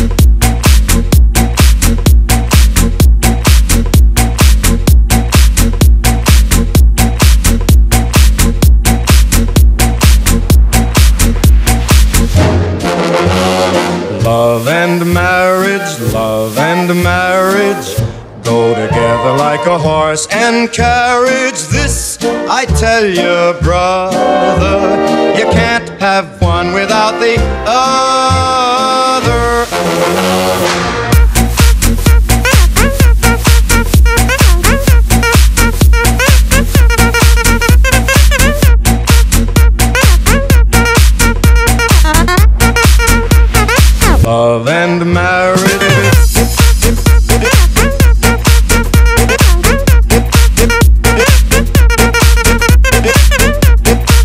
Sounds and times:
Music: 0:00.0 - 0:54.2.

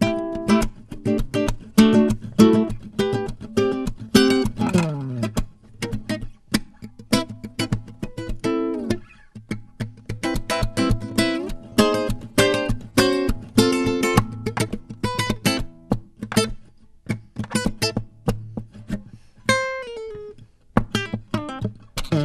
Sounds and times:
Acoustic guitar: 0:00.0 - 0:22.2.

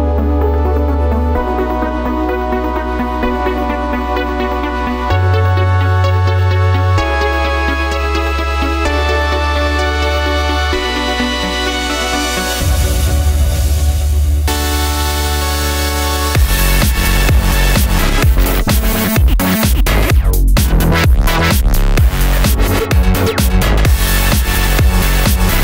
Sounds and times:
Electronic music: 0:00.0 - 0:25.6.

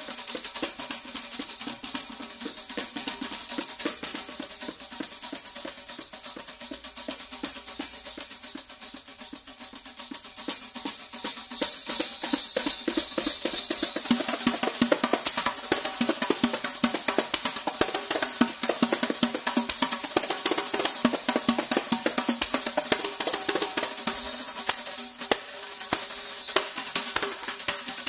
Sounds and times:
Tambourine: 0:00.0 - 0:28.0.

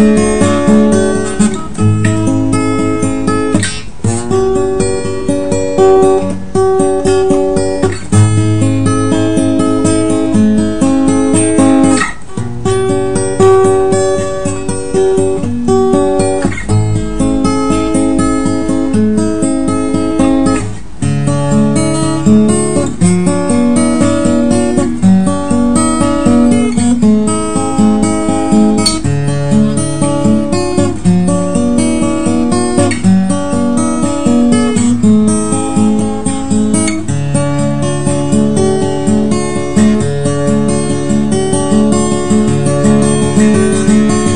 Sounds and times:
Acoustic guitar: 0:00.0 - 0:44.3.

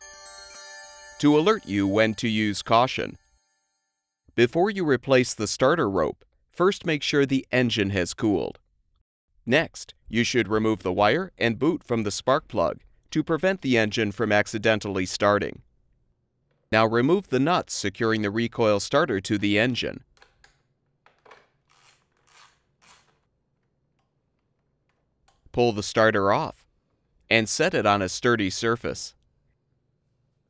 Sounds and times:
Speech: 0:01.2 - 0:03.2, 0:04.4 - 0:08.6, 0:09.5 - 0:15.6, 0:16.8 - 0:20.0, 0:25.6 - 0:26.7, 0:27.3 - 0:29.2.

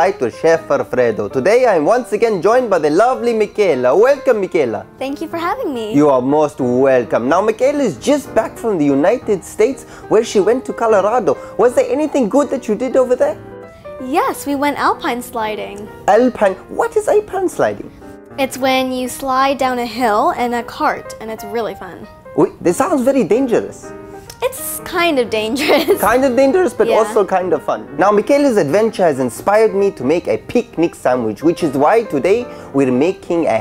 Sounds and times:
Music: 0:00.0 - 0:33.6
Speech: 0:26.0 - 0:32.2.

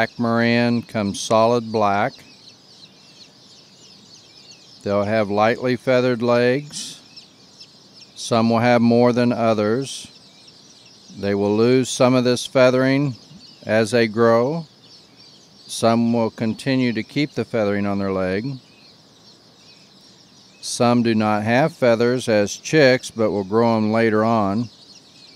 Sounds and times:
Speech: 0:00.0 - 0:02.2, 0:04.9 - 0:07.0, 0:08.2 - 0:10.1, 0:11.2 - 0:14.7, 0:15.7 - 0:18.6, 0:20.6 - 0:24.7.

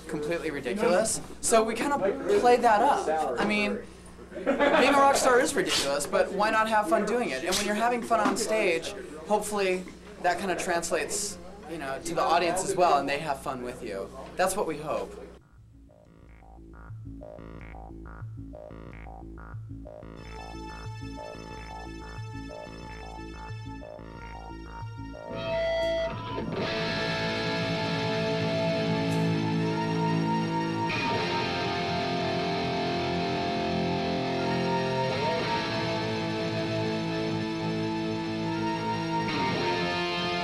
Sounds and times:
Speech: 0:00.0 - 0:15.4.

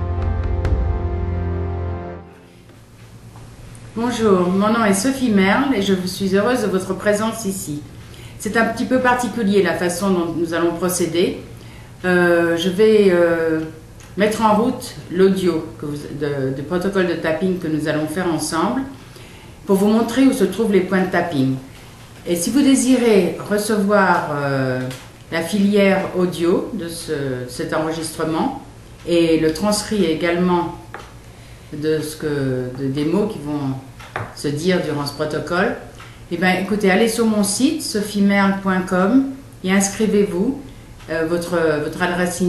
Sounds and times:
Speech: 0:04.0 - 0:19.0, 0:19.6 - 0:30.9, 0:31.7 - 0:42.4.

